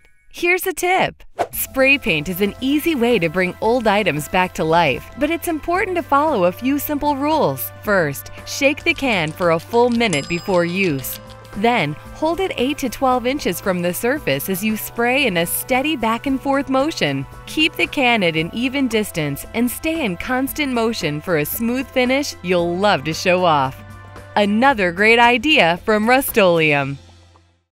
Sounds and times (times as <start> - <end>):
Speech: 0.4 - 23.8, 24.4 - 27.0
Music: 1.5 - 27.7.